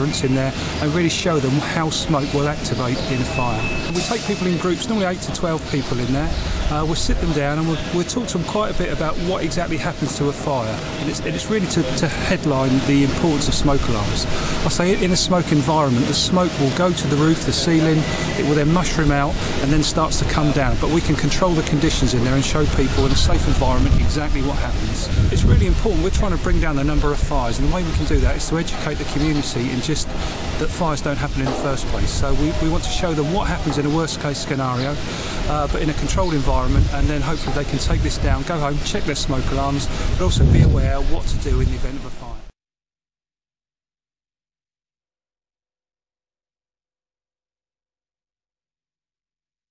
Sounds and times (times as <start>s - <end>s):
Speech: 0.0s - 42.6s.